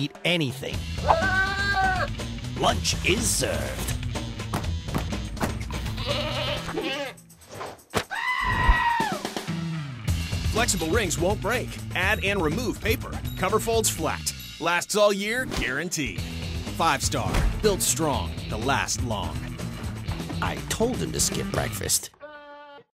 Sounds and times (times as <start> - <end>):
Speech: 0.0 - 0.8, 2.6 - 3.9, 10.5 - 16.2, 16.8 - 19.4, 20.4 - 22.2
Music: 0.0 - 22.1.